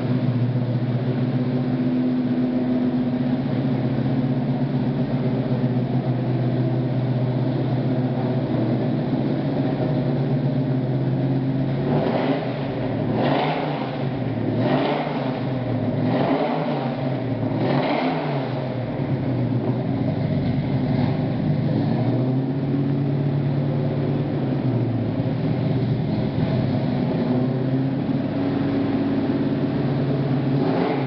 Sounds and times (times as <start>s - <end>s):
Truck: 0.0s - 31.0s.